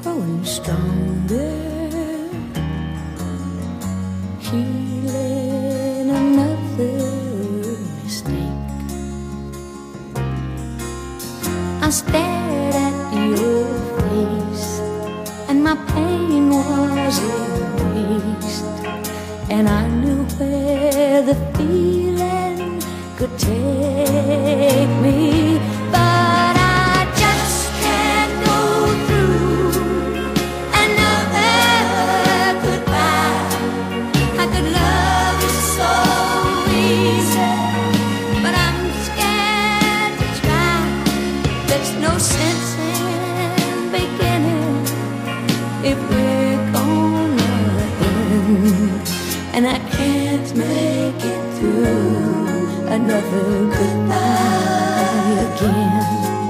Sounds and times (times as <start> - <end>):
Country: 0.0 - 56.5.